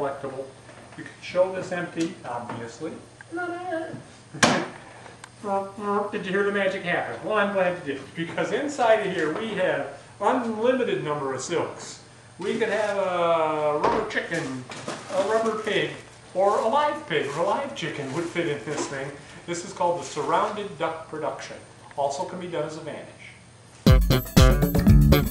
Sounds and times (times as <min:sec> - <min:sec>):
Speech: 0:00.0 - 0:04.5, 0:05.4 - 0:23.4.